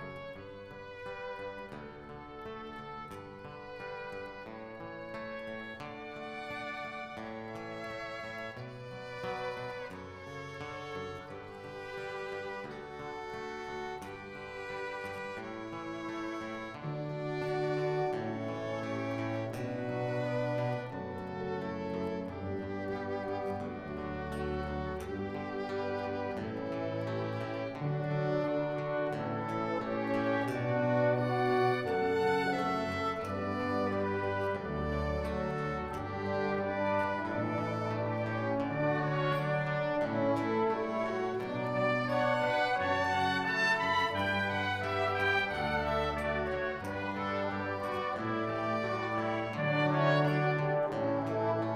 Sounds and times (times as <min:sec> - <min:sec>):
Music: 0:00.0 - 0:51.7.